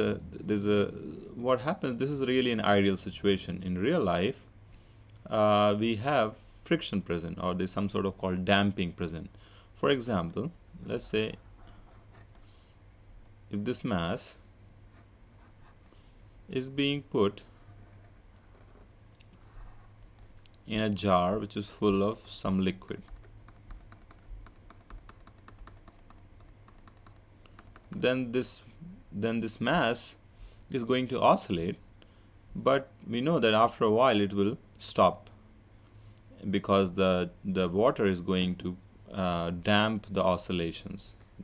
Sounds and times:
Speech: 0:00.0 - 0:04.5, 0:05.2 - 0:11.4, 0:13.5 - 0:14.4, 0:16.5 - 0:17.5, 0:20.6 - 0:23.1, 0:27.9 - 0:31.8, 0:32.6 - 0:35.4, 0:36.4 - 0:41.4.

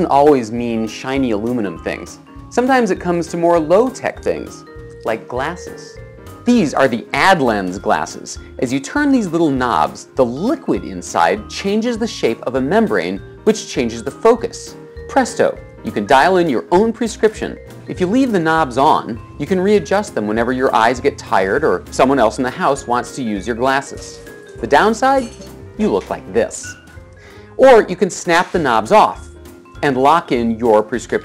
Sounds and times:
Speech: 0:00.0 - 0:26.8, 0:27.6 - 0:31.2.

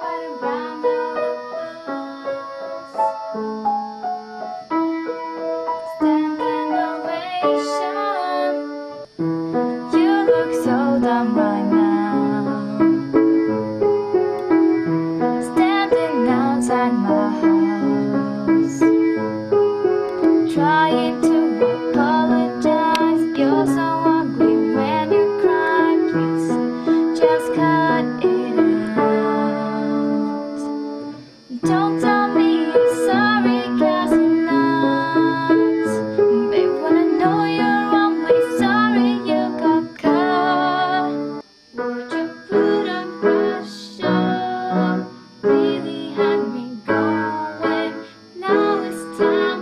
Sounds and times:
Female singing: 0:00.0 - 0:02.4, 0:05.9 - 0:08.7, 0:09.9 - 0:13.0, 0:15.4 - 0:18.8, 0:20.4 - 0:30.7, 0:31.5 - 0:41.4, 0:42.1 - 0:49.6
Music: 0:00.0 - 0:49.6.

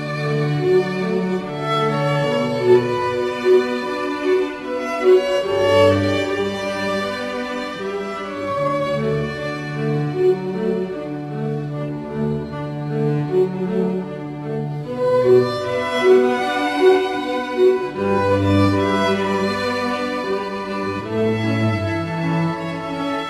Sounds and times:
Music: 0:00.0 - 0:23.2.

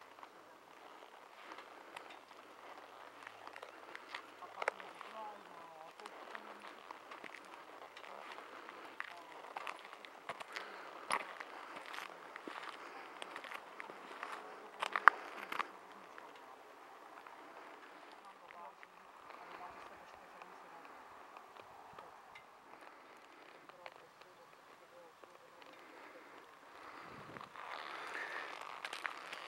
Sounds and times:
Walk, footsteps: 0:05.9 - 0:16.5, 0:26.8 - 0:29.4.

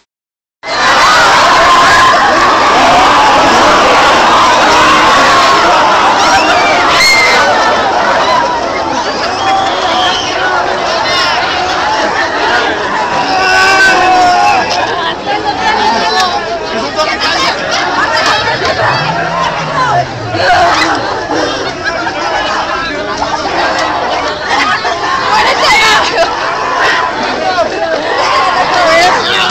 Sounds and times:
Speech: 0:08.0 - 0:29.5.

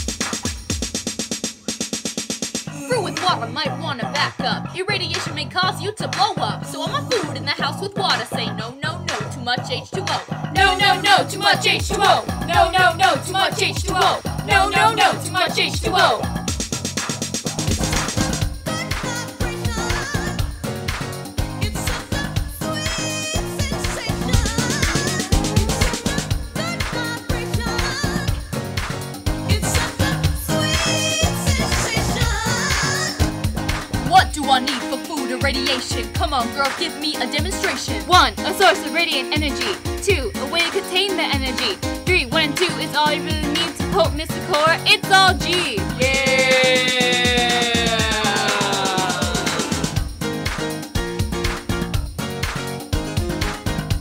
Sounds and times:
Hip hop music: 0:00.0 - 0:54.0.

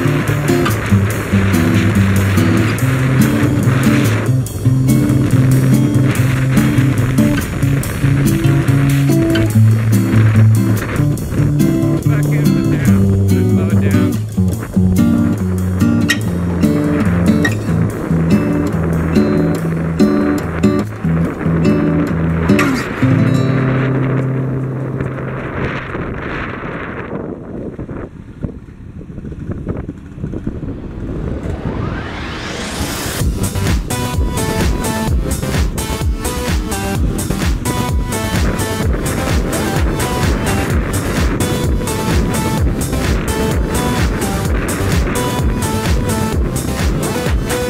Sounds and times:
Music: 0:00.0 - 0:25.8, 0:32.9 - 0:47.7
Outside, urban or manmade: 0:00.0 - 0:47.7.

